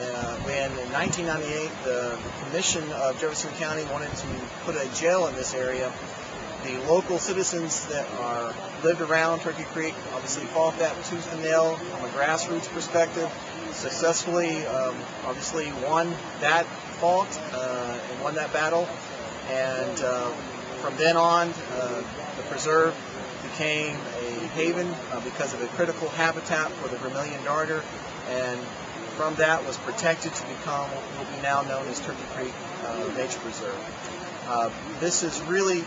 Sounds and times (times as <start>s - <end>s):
Speech: 0.0s - 6.0s, 6.6s - 33.9s, 34.5s - 35.8s.